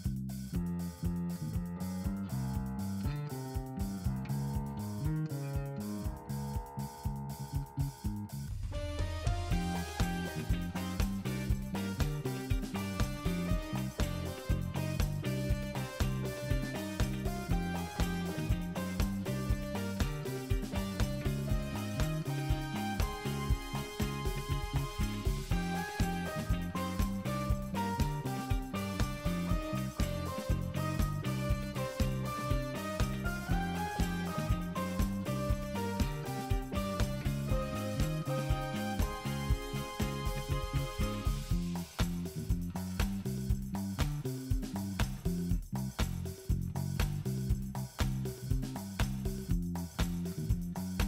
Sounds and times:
Music: 0.0s - 51.0s.

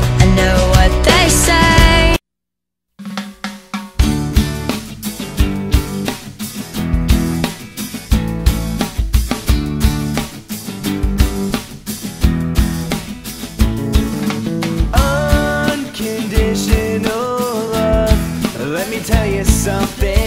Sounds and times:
Pop music: 0.0s - 2.2s, 7.0s - 20.2s.

